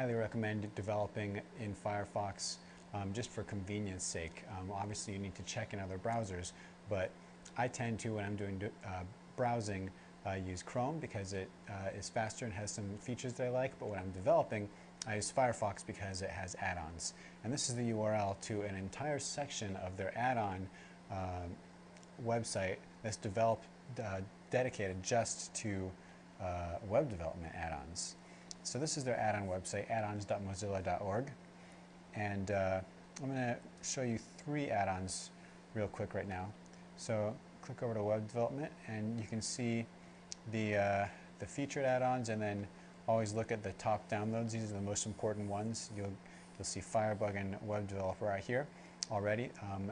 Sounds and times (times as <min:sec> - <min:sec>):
Speech: 0:00.0 - 0:21.6, 0:22.2 - 0:31.4, 0:32.1 - 0:49.9.